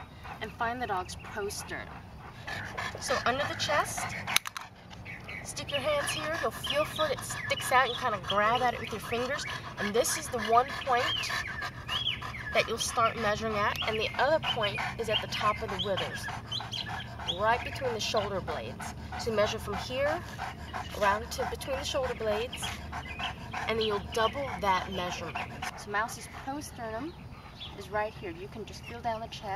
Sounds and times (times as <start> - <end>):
Dog: 0.0 - 29.0
Speech: 3.0 - 4.2, 5.5 - 11.3, 12.6 - 16.3, 17.3 - 20.2, 20.9 - 22.7, 23.7 - 27.2, 27.8 - 29.5.